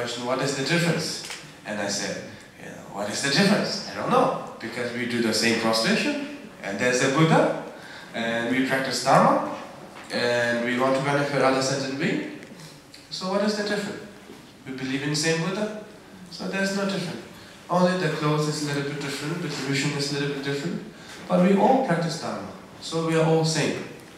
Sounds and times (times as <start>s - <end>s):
Speech: 0.0s - 24.0s.